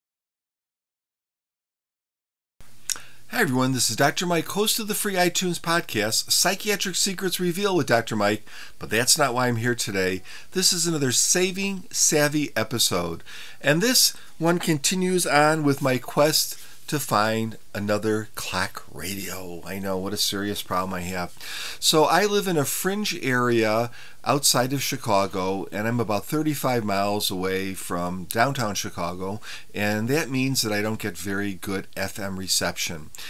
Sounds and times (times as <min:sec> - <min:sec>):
Speech: 0:03.3 - 0:33.1.